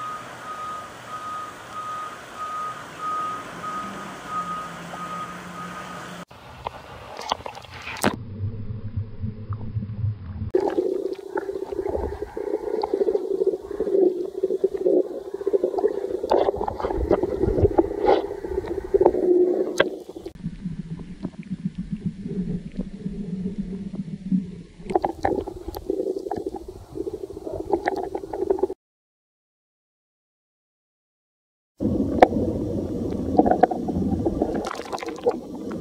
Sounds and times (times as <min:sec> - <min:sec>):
Stomach rumble: 0:06.6 - 0:28.8, 0:31.8 - 0:35.8.